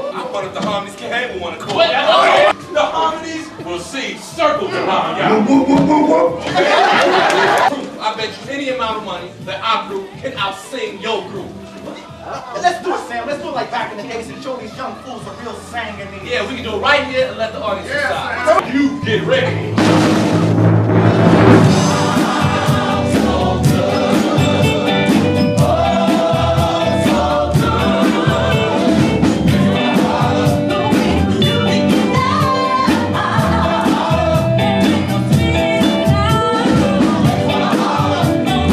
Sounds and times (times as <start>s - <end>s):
Music: 0.0s - 38.7s.